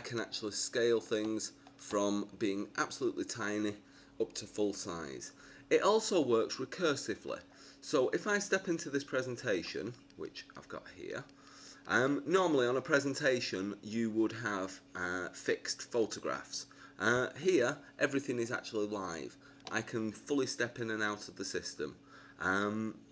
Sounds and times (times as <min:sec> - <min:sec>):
Speech: 0:00.0 - 0:23.1.